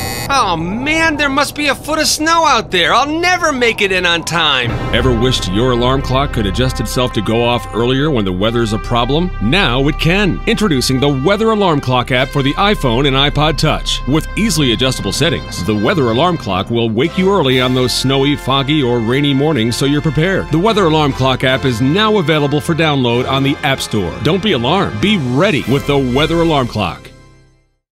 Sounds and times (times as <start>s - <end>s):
Music: 0.0s - 27.9s
Speech: 0.3s - 27.1s.